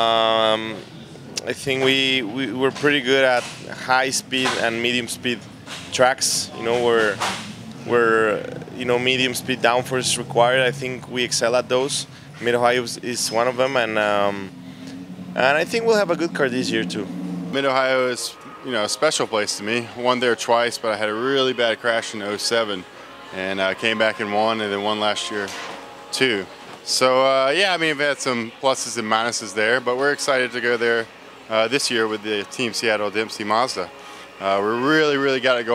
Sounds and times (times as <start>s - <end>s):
Speech: 0.0s - 0.8s, 1.4s - 7.2s, 7.9s - 14.5s, 15.4s - 22.8s, 23.4s - 25.6s, 26.2s - 35.7s.